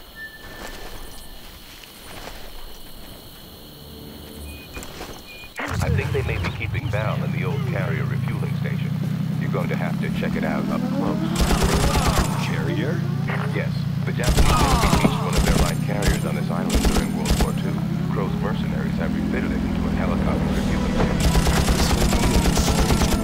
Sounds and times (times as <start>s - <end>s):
Outside, rural or natural: 0.0s - 23.2s
Speech: 5.6s - 23.2s.